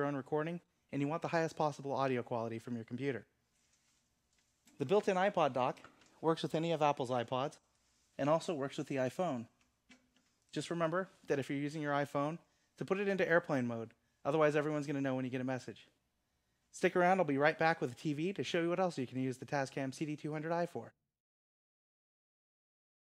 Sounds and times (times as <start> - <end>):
Speech: 0.0 - 3.3, 4.8 - 7.6, 8.2 - 9.6, 10.5 - 16.0, 16.7 - 21.0.